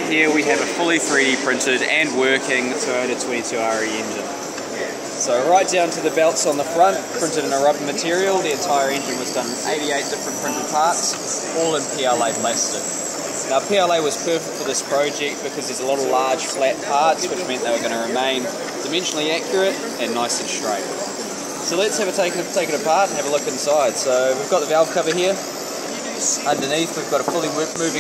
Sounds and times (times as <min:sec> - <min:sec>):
Speech: 0:00.0 - 0:28.0.